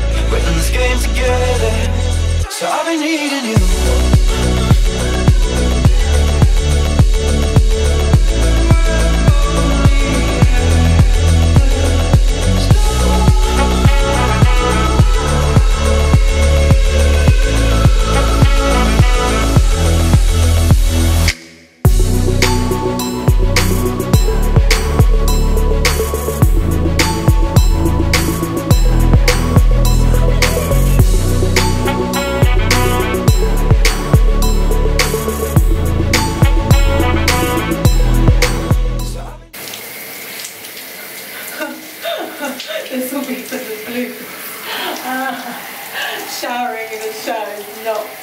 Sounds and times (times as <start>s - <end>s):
Water: 39.5s - 48.2s.